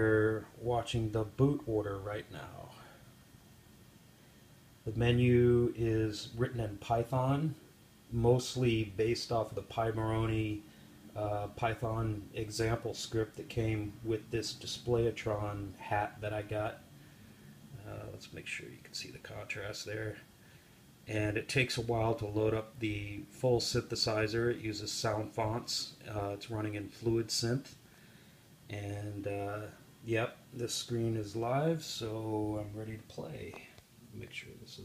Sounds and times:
Speech: 0.0 - 3.0, 4.8 - 16.8, 17.7 - 20.3, 21.1 - 27.8, 28.7 - 34.8.

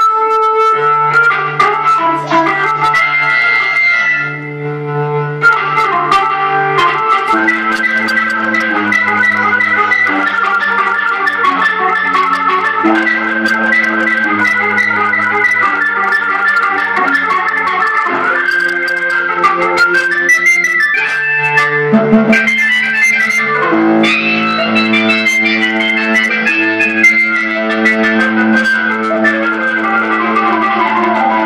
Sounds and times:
Electronic organ: 0.0 - 31.4.

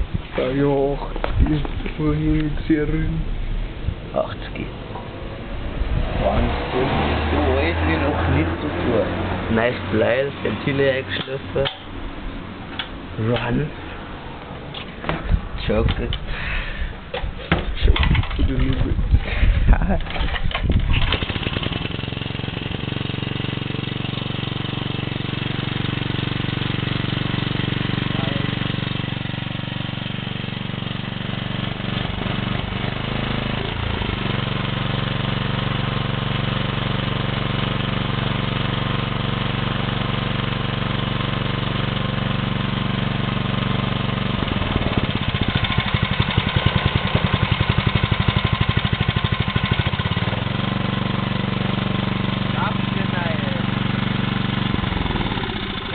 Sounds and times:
Medium engine (mid frequency): 0.0 - 55.9
Speech: 0.4 - 3.3, 4.1 - 4.8, 6.2 - 11.8, 13.2 - 13.8, 15.6 - 16.2, 17.8 - 19.0, 28.1 - 28.6, 52.6 - 53.7.

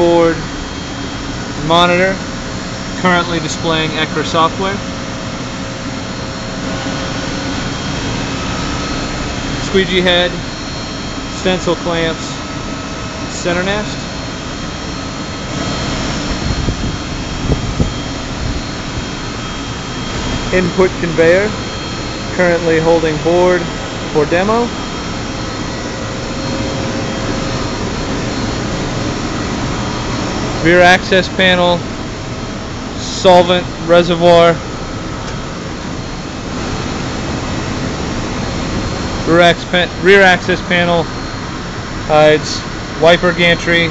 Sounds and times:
Speech: 0.0 - 0.5, 1.6 - 2.3, 3.0 - 4.9, 9.6 - 10.4, 11.4 - 12.4, 13.3 - 14.0, 20.5 - 21.6, 22.3 - 24.8, 30.6 - 31.8, 33.0 - 34.6, 39.2 - 41.1, 42.1 - 43.9.

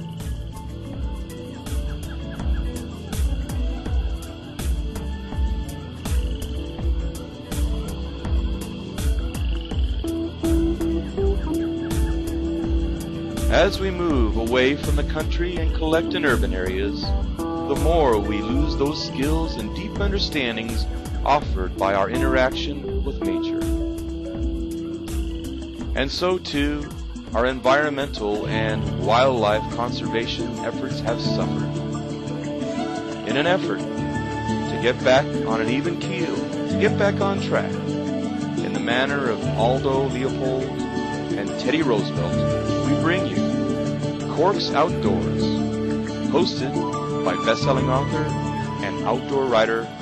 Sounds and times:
Music: 0.0 - 50.0
Speech: 13.5 - 17.1, 17.7 - 23.6, 26.0 - 31.7, 33.2 - 33.8, 34.7 - 37.7, 38.6 - 40.7, 41.4 - 43.4, 44.3 - 45.6, 46.3 - 49.9.

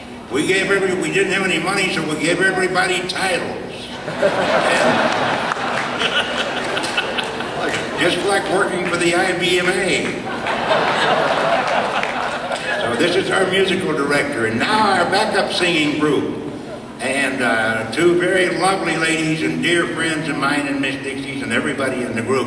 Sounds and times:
Male speech, man speaking: 0.3 - 3.9, 8.0 - 10.2, 12.8 - 16.4, 17.0 - 22.4
Chuckle, chortle: 4.0 - 7.9
Applause: 5.1 - 7.8, 11.6 - 12.4.

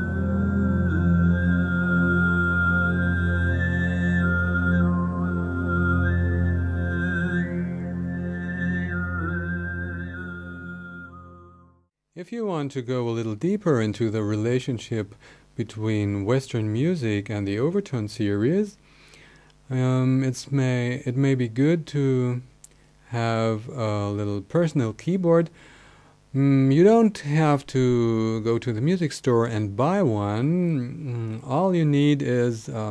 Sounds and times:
Music: 0.0 - 11.9
Speech: 12.2 - 18.8, 19.7 - 22.5, 23.1 - 25.6, 26.4 - 32.9.

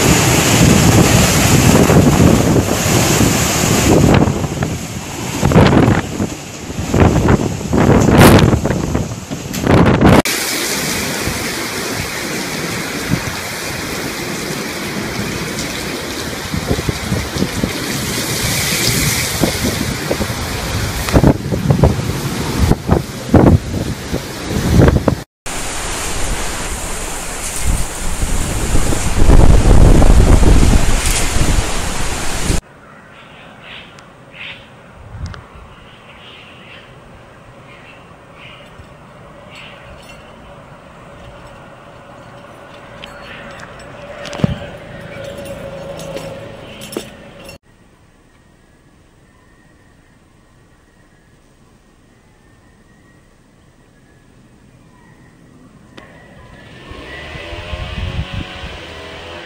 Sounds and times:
Rain: 0.0 - 32.6.

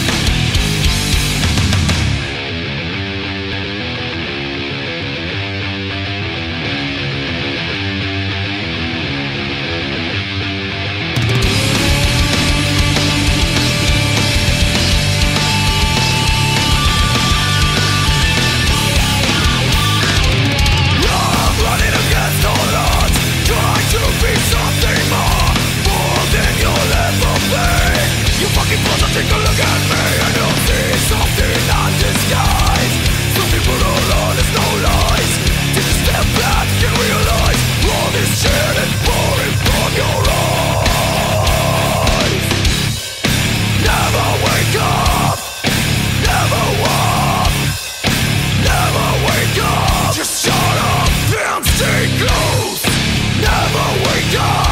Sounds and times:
Heavy metal: 0.0 - 54.7.

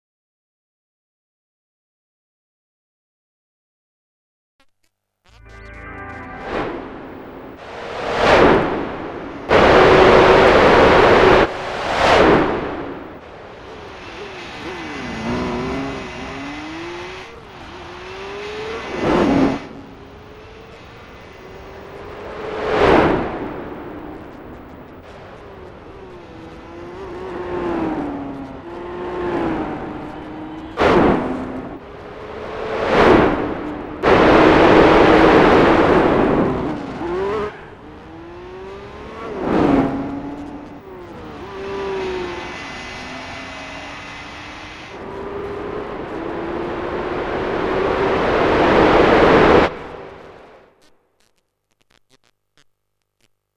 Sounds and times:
Car: 5.3 - 50.9.

